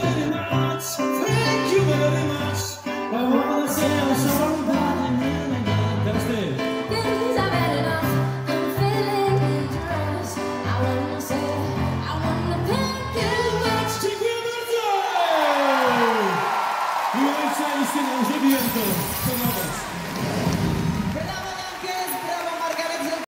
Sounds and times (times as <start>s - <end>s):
Music: 0.0s - 14.7s
Speech: 17.2s - 19.8s.